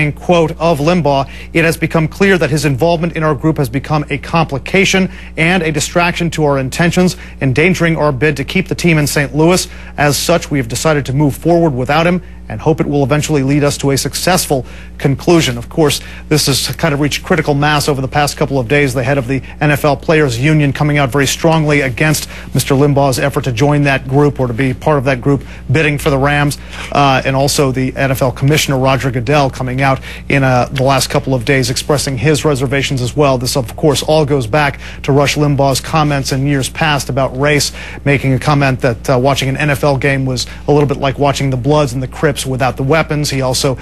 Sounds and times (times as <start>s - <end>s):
Speech: 0.0s - 43.8s.